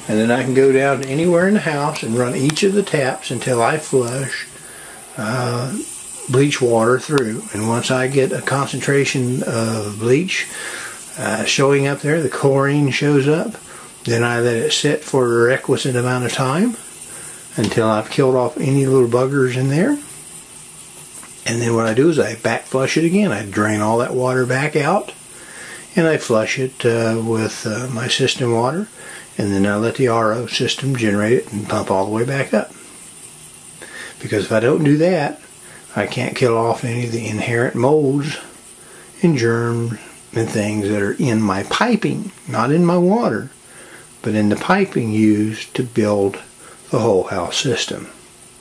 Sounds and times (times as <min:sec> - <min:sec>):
Speech: 0:00.0 - 0:04.6, 0:05.2 - 0:16.9, 0:17.5 - 0:20.1, 0:21.4 - 0:25.2, 0:25.9 - 0:32.8, 0:34.1 - 0:38.6, 0:39.2 - 0:43.6, 0:44.2 - 0:48.2.